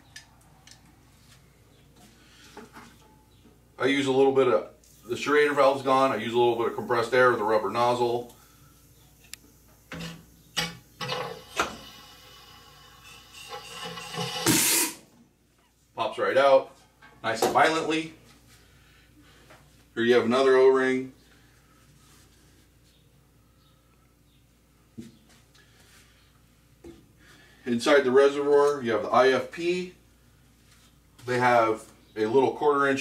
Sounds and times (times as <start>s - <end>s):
Speech: 3.8s - 8.3s, 16.0s - 18.2s, 20.0s - 21.2s, 27.6s - 30.0s, 31.2s - 33.0s.